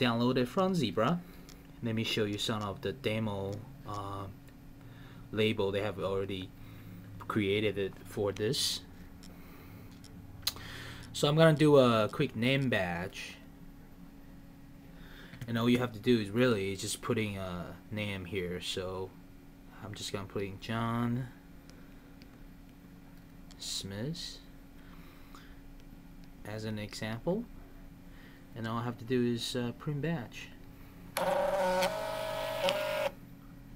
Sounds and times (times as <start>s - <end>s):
Speech: 0.0s - 1.2s, 1.8s - 4.4s, 5.4s - 6.5s, 7.2s - 8.9s, 11.2s - 13.4s, 15.5s - 21.4s, 23.6s - 24.5s, 26.4s - 27.6s, 28.6s - 30.6s.